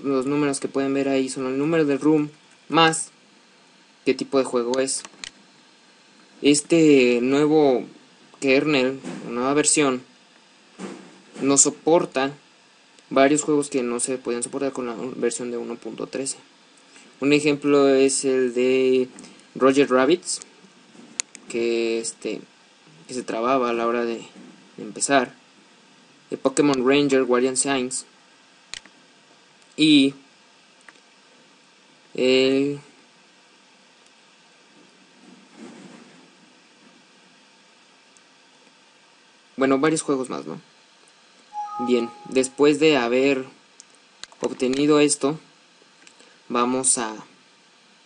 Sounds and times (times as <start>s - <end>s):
Speech: 0.0s - 3.2s, 4.0s - 5.1s, 6.4s - 10.1s, 11.4s - 12.4s, 13.1s - 16.5s, 17.2s - 20.5s, 21.5s - 22.5s, 23.1s - 25.4s, 26.3s - 28.2s, 29.8s - 30.3s, 32.2s - 33.0s, 39.6s - 40.7s, 41.7s - 43.6s, 44.4s - 45.5s, 46.5s - 47.4s.